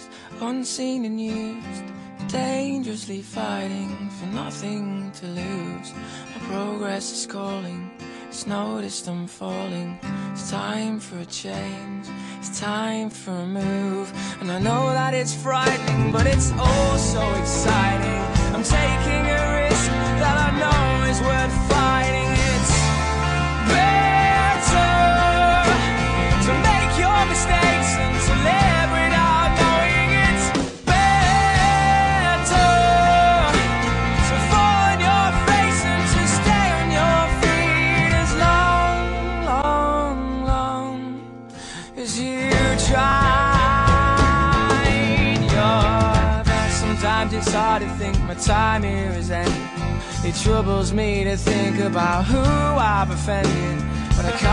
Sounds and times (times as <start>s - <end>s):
Blues: 11.5s - 54.5s.